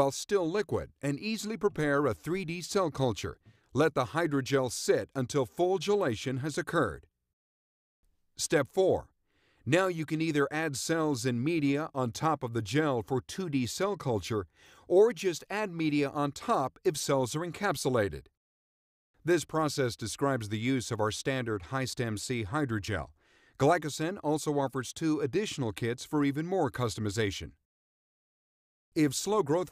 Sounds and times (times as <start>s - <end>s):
Speech: 0.0s - 7.1s, 8.4s - 9.1s, 9.7s - 18.3s, 19.2s - 27.6s, 29.0s - 29.7s.